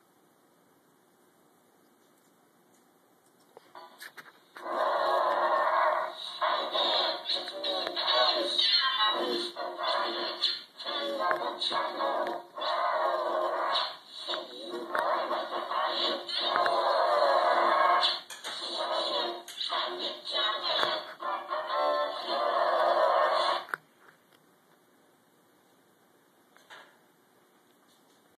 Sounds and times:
Sound effect: 0:03.8 - 0:23.7.

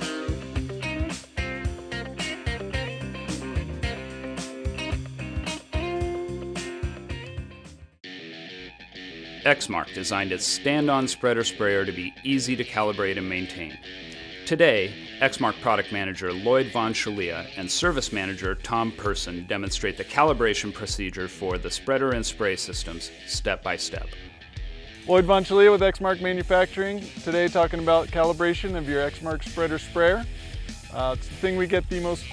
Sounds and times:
Music: 0:00.0 - 0:32.3
Speech: 0:09.4 - 0:13.8, 0:14.5 - 0:24.2, 0:25.0 - 0:30.3, 0:30.9 - 0:32.3.

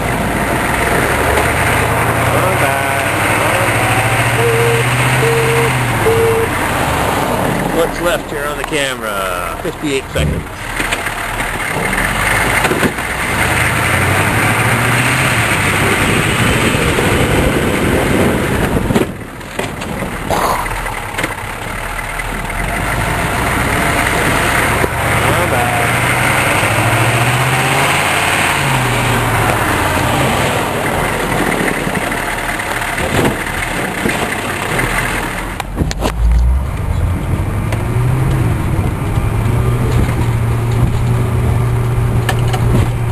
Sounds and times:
Vehicle: 0:00.0 - 0:43.1.

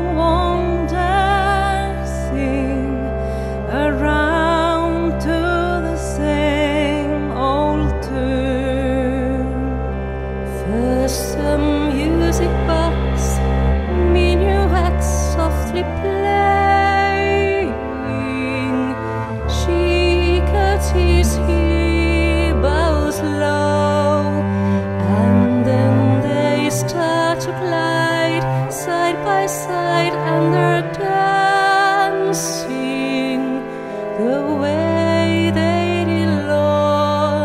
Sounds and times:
Tender music: 0:00.0 - 0:37.4.

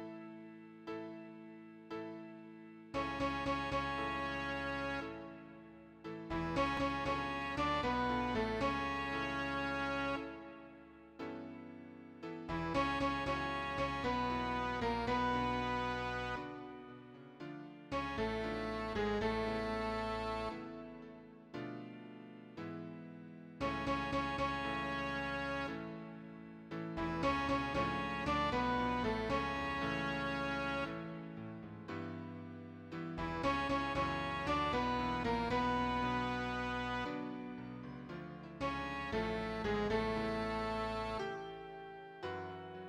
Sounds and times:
Tender music: 0:00.0 - 0:42.8.

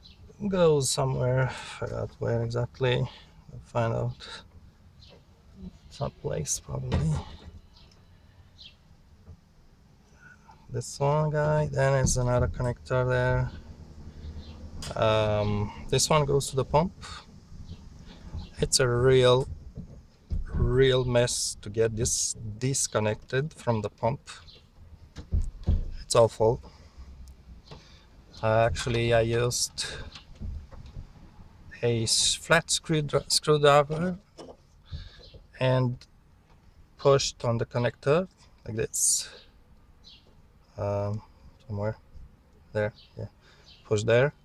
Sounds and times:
Speech: 0:00.4 - 0:04.4, 0:05.6 - 0:07.4, 0:10.7 - 0:13.6, 0:14.9 - 0:17.3, 0:18.6 - 0:19.5, 0:20.5 - 0:24.4, 0:26.0 - 0:26.6, 0:28.4 - 0:30.1, 0:31.8 - 0:34.3, 0:35.6 - 0:36.0, 0:37.0 - 0:39.4, 0:40.8 - 0:42.0, 0:42.7 - 0:44.4.

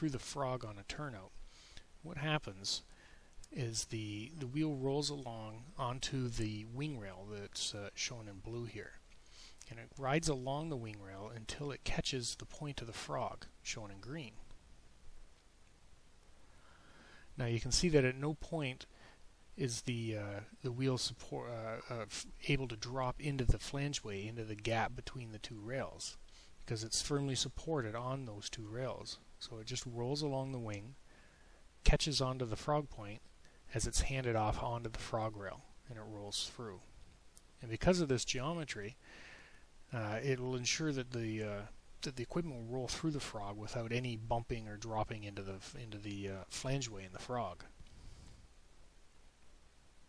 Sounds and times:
Speech: 0:00.0 - 0:01.4, 0:02.0 - 0:02.9, 0:03.5 - 0:09.0, 0:09.6 - 0:14.5, 0:17.4 - 0:18.9, 0:19.6 - 0:31.0, 0:31.8 - 0:36.9, 0:37.6 - 0:39.0, 0:39.9 - 0:47.7.

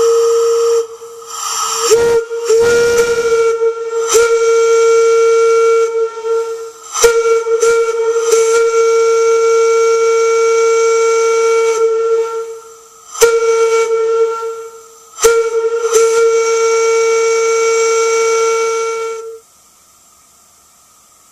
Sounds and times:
Steam whistle: 0:00.0 - 0:19.6.

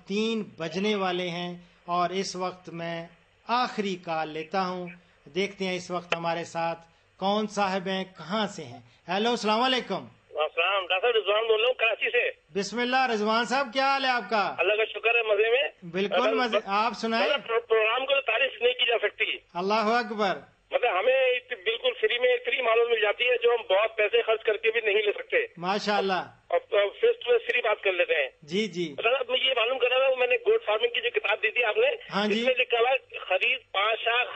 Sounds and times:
Speech: 0:00.0 - 0:34.3.

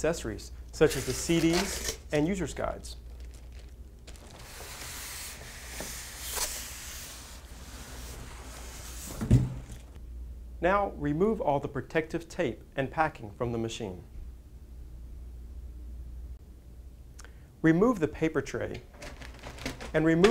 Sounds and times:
Speech: 0:00.0 - 0:03.0, 0:10.6 - 0:14.1, 0:17.6 - 0:18.8, 0:19.9 - 0:20.3.

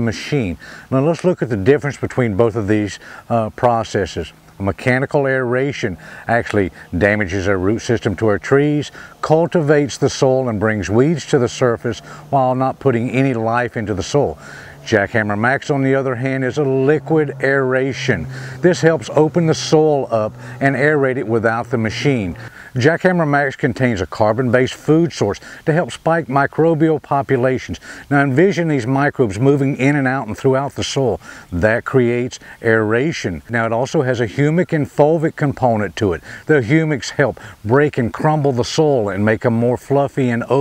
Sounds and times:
Speech: 0:00.0 - 0:40.6.

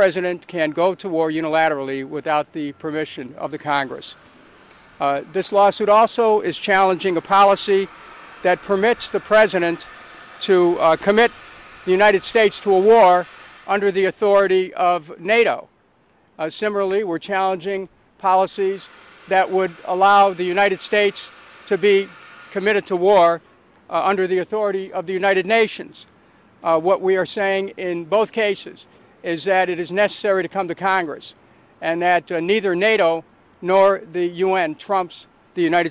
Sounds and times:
Speech: 0:00.0 - 0:04.2, 0:05.0 - 0:11.3, 0:11.9 - 0:15.7, 0:16.4 - 0:35.9.

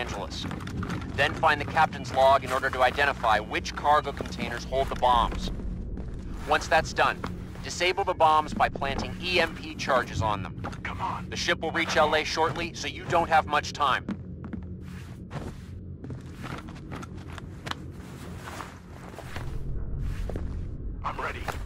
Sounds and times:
Speech: 0:00.0 - 0:00.4, 0:01.2 - 0:05.5, 0:06.4 - 0:14.0, 0:21.0 - 0:21.6.

